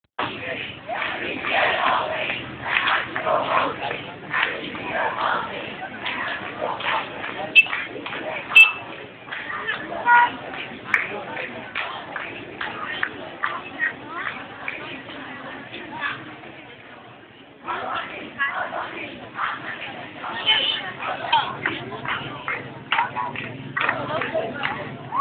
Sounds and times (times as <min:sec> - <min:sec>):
Outside, urban or manmade: 0:00.1 - 0:25.2
Speech: 0:00.2 - 0:25.2.